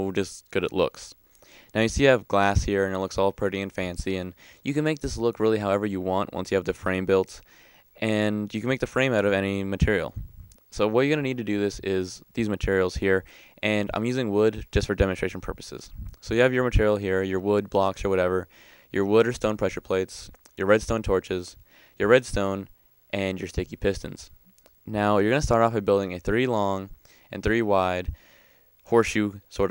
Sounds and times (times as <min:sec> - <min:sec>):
Speech: 0:00.0 - 0:07.4, 0:08.0 - 0:28.2, 0:28.9 - 0:29.7.